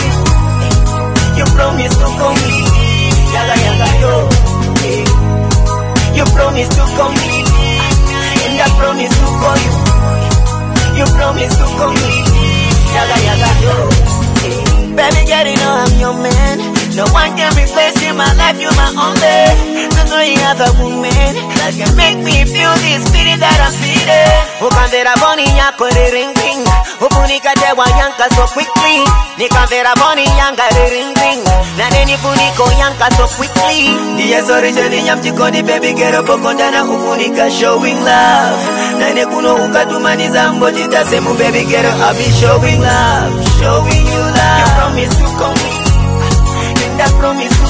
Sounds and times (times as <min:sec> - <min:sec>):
Music: 0:00.0 - 0:47.6.